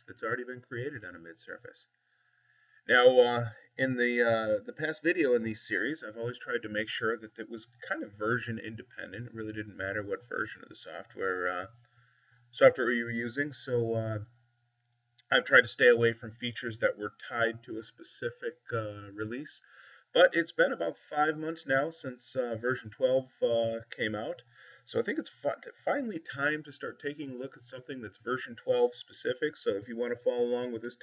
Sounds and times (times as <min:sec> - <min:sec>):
Speech: 0:00.0 - 0:01.8, 0:02.9 - 0:11.7, 0:12.6 - 0:14.3, 0:15.3 - 0:31.0.